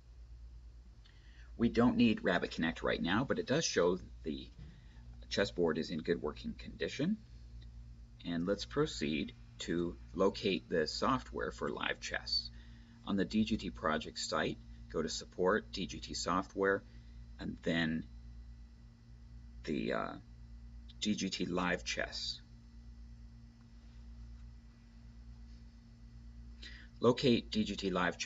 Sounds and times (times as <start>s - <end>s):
Speech: 1.6s - 4.6s, 5.2s - 7.3s, 8.2s - 18.1s, 19.6s - 20.3s, 20.9s - 22.5s, 27.0s - 28.2s.